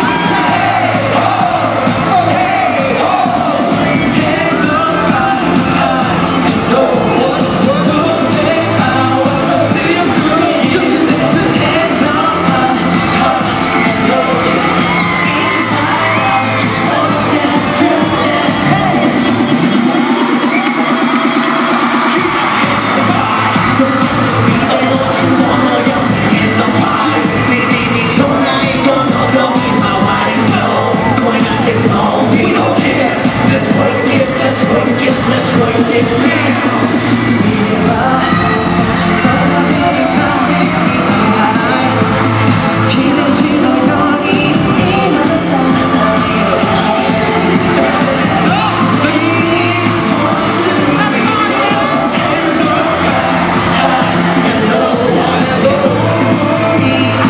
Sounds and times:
Music: 0:00.0 - 0:57.3.

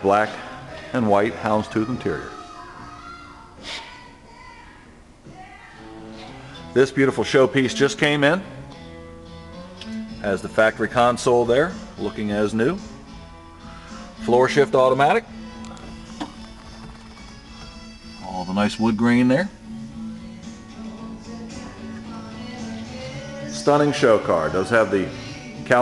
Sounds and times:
Speech: 0:00.0 - 0:02.6, 0:06.8 - 0:08.4, 0:10.2 - 0:12.8, 0:14.2 - 0:15.2, 0:18.2 - 0:19.6, 0:23.6 - 0:25.8
Music: 0:00.0 - 0:25.8.

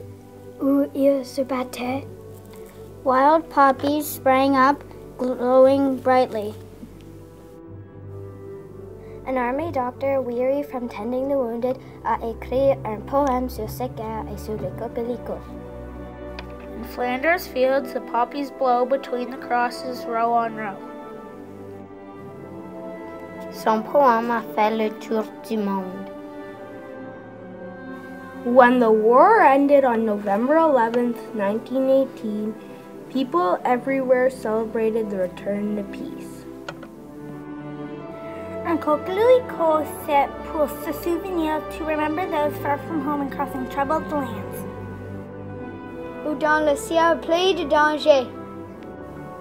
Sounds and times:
Music: 0:00.0 - 0:49.4
Speech: 0:00.6 - 0:02.1, 0:03.1 - 0:06.6, 0:09.3 - 0:15.5, 0:16.8 - 0:20.8, 0:23.5 - 0:26.1, 0:28.5 - 0:36.4, 0:38.7 - 0:44.6, 0:46.2 - 0:48.3.

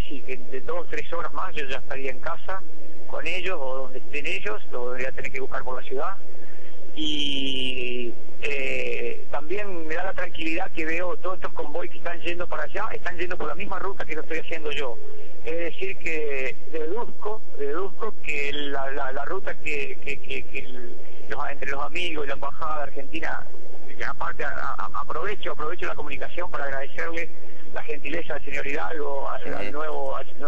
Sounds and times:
Speech: 0:00.0 - 0:06.2, 0:07.0 - 0:30.4.

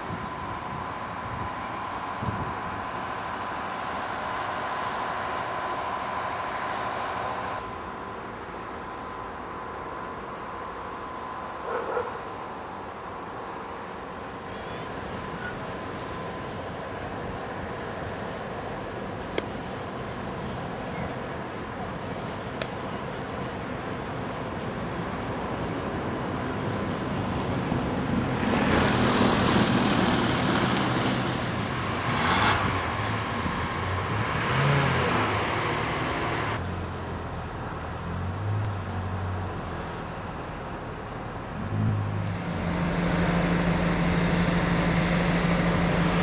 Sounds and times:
Railroad car, train wagon: 0:00.0 - 0:46.2
Train: 0:00.0 - 0:46.2.

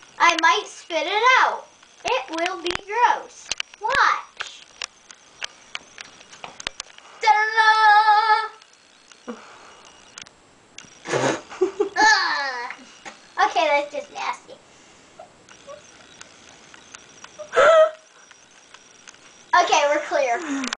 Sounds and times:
Speech: 0:19.6 - 0:20.5.

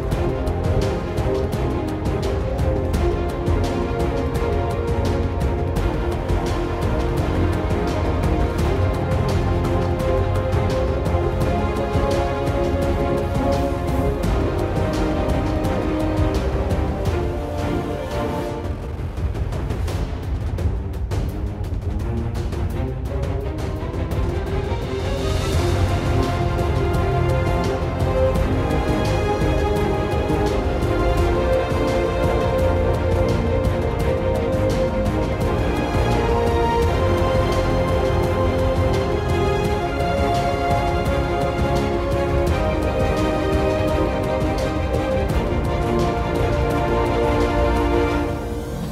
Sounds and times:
Theme music: 0:00.0 - 0:48.9.

